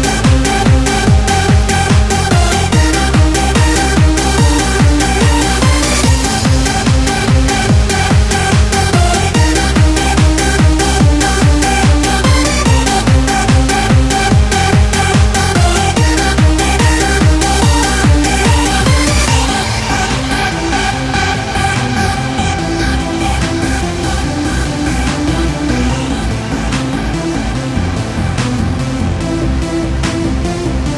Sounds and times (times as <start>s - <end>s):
Music: 0.0s - 30.9s.